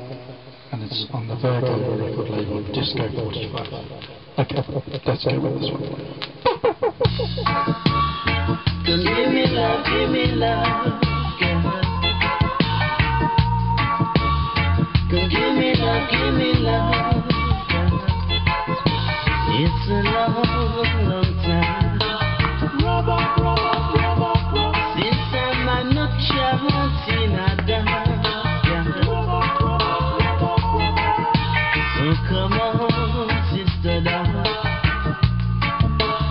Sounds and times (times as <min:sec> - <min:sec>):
Music: 0:07.1 - 0:36.3.